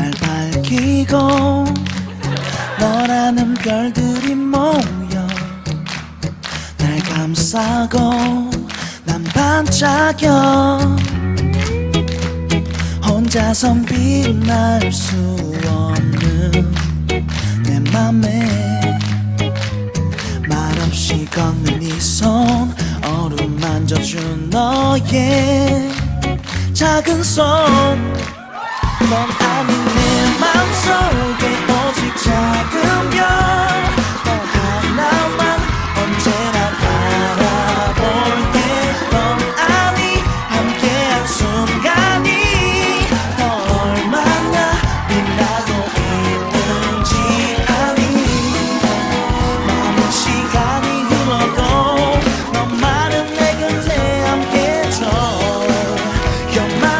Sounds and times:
Male singing: 0.0s - 5.7s, 6.8s - 11.1s, 13.0s - 16.8s, 17.5s - 19.0s, 20.4s - 28.3s, 29.0s - 56.9s
Music: 0.0s - 56.9s.

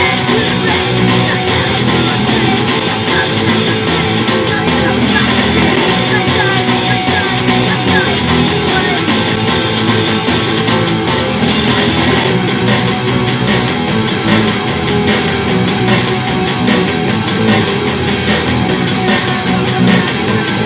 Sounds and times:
Blues: 0.0s - 20.6s
Rhythm and blues: 0.0s - 20.6s.

